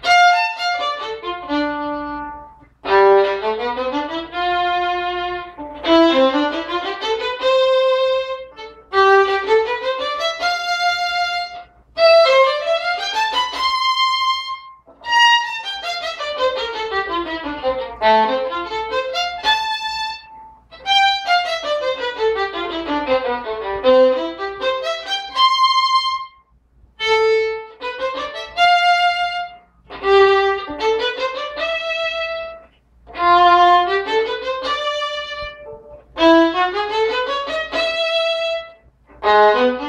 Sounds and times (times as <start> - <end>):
Violin, fiddle: 0.0 - 26.4, 27.0 - 39.8.